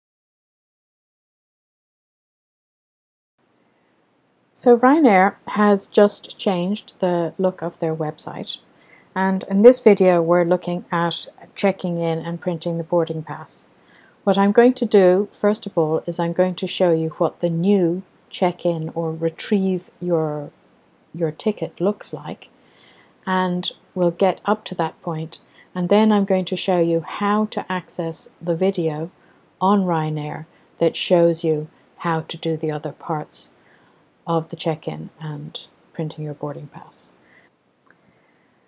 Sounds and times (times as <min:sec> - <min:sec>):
Speech: 0:04.6 - 0:08.6, 0:09.2 - 0:13.7, 0:14.3 - 0:20.5, 0:21.2 - 0:22.5, 0:23.2 - 0:33.5, 0:34.3 - 0:37.1.